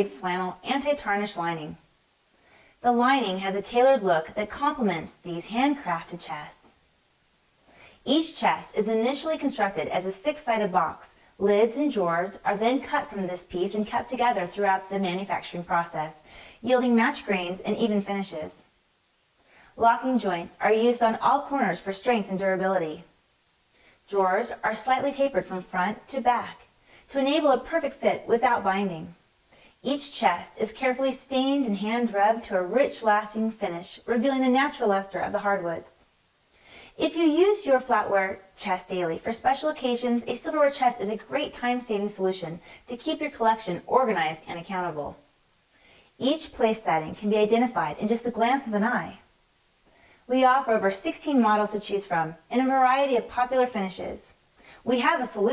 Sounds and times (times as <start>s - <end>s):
Speech: 0.0s - 1.8s, 2.8s - 6.8s, 8.0s - 18.7s, 19.8s - 23.1s, 24.1s - 29.2s, 29.8s - 36.0s, 37.0s - 45.3s, 46.2s - 49.3s, 50.3s - 55.5s.